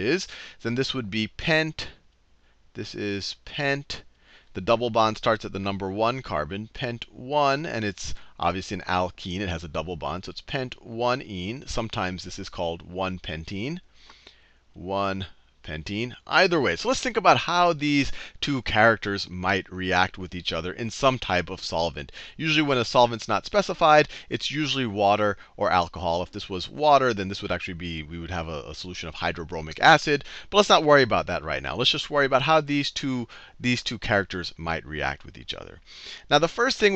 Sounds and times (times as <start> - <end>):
Speech: 0.0 - 2.0, 2.8 - 13.8, 14.8 - 36.9.